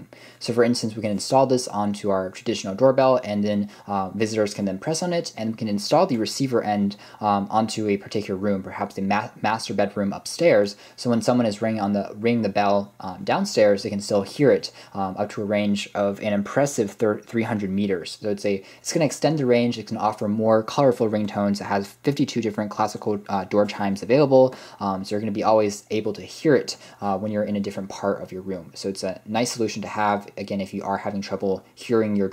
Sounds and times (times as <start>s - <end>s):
Speech: 0.0s - 32.3s.